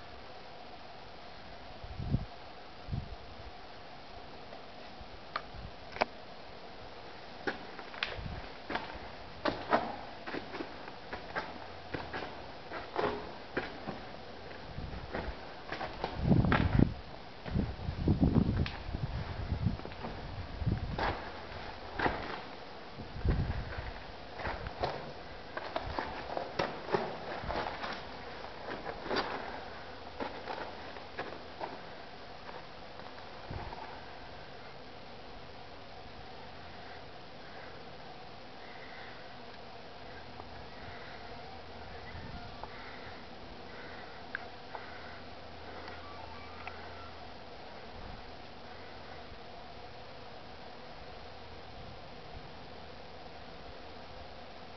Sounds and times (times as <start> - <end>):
Walk, footsteps: 7.4 - 17.7, 23.3 - 31.8.